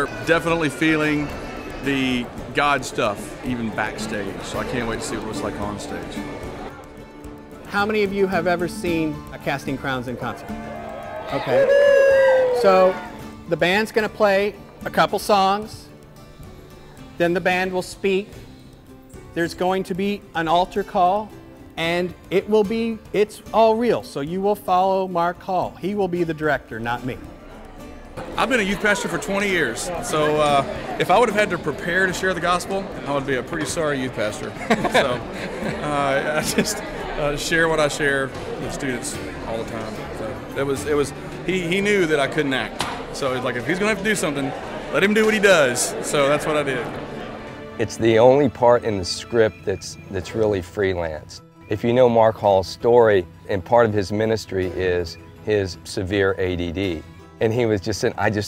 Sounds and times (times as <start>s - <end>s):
Speech: 0.0s - 6.1s, 7.7s - 10.4s, 28.4s - 35.2s, 47.8s - 58.4s
Music: 0.0s - 58.4s.